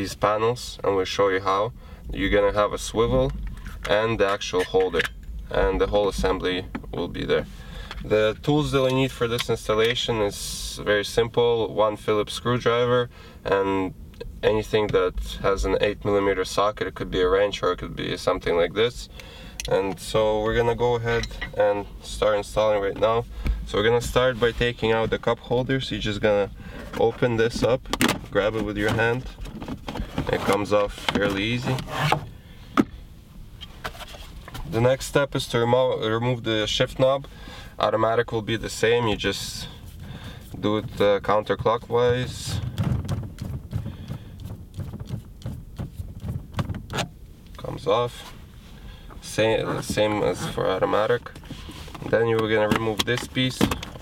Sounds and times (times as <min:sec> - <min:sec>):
Speech: 0:00.0 - 0:07.5, 0:08.1 - 0:19.1, 0:19.7 - 0:29.4, 0:30.3 - 0:31.9, 0:34.7 - 0:39.7, 0:40.6 - 0:42.7, 0:47.6 - 0:48.3, 0:49.2 - 0:51.4, 0:52.0 - 0:53.8.